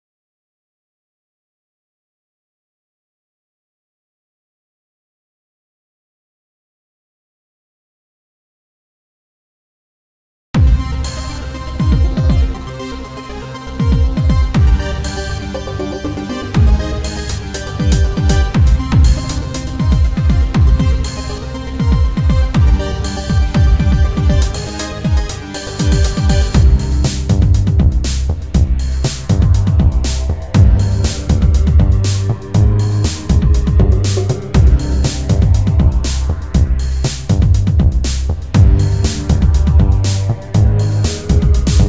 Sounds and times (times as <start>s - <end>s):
Techno: 10.6s - 41.8s.